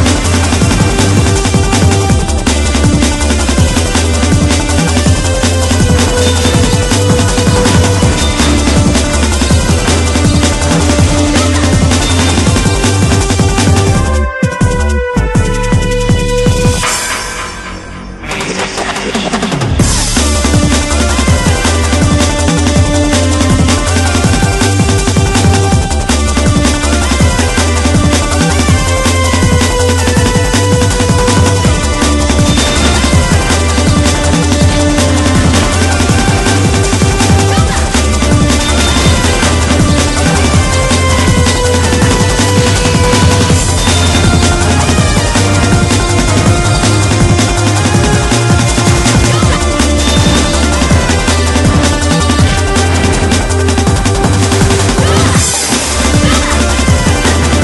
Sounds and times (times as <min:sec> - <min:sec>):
Music: 0:00.0 - 0:57.6.